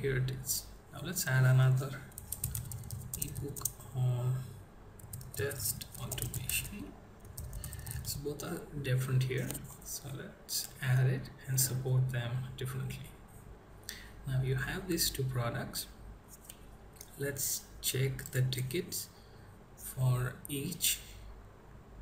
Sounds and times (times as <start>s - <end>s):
Typing: 2.1s - 3.8s, 5.0s - 8.2s.